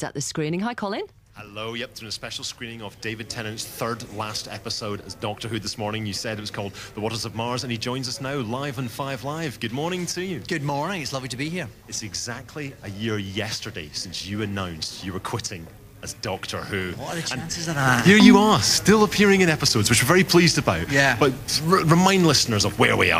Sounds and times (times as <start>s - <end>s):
Speech: 0.0s - 23.1s.